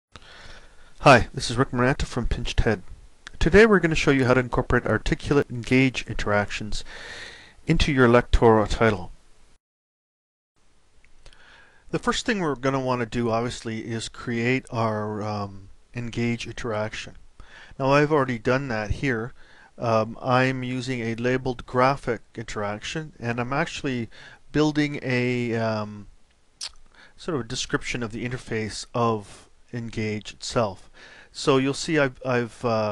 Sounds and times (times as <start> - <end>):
Speech: 1.0 - 6.9, 7.7 - 9.2, 11.9 - 17.2, 17.8 - 26.1, 27.2 - 32.9.